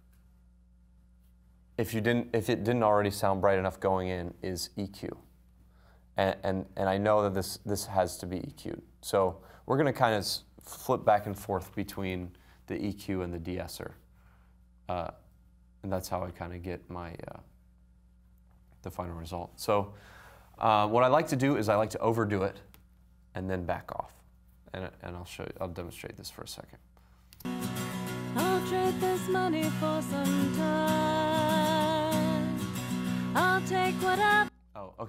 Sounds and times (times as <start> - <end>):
Speech: 1.8 - 5.3, 6.2 - 14.0, 14.9 - 17.5, 18.8 - 20.0, 20.6 - 22.7, 23.4 - 26.9, 34.8 - 35.0.